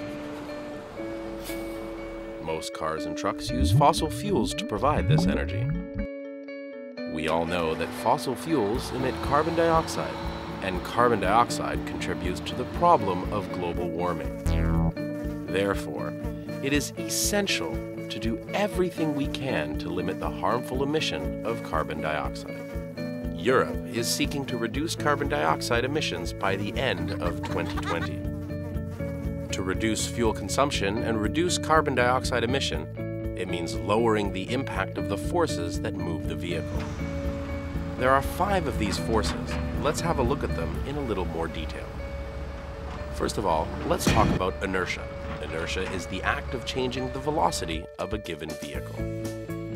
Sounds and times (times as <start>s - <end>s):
Music: 0.0s - 49.7s
Speech: 2.4s - 5.8s, 7.2s - 14.4s, 15.5s - 22.5s, 23.4s - 28.2s, 29.5s - 36.7s, 38.0s - 41.8s, 43.2s - 48.9s.